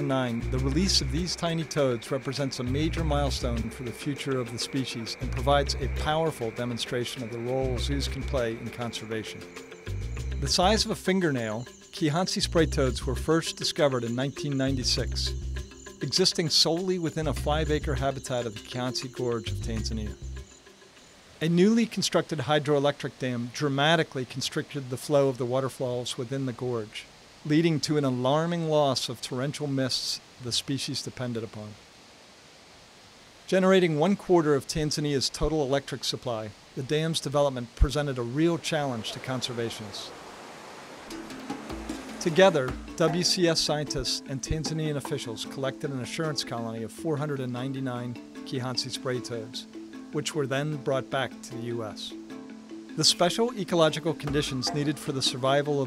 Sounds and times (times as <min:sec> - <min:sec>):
Speech: 0:00.0 - 0:09.4, 0:10.4 - 0:15.4, 0:16.0 - 0:20.2, 0:21.4 - 0:31.8, 0:33.5 - 0:40.1, 0:42.2 - 0:52.2, 0:53.0 - 0:55.8
Music: 0:00.0 - 0:22.2, 0:41.1 - 0:55.8.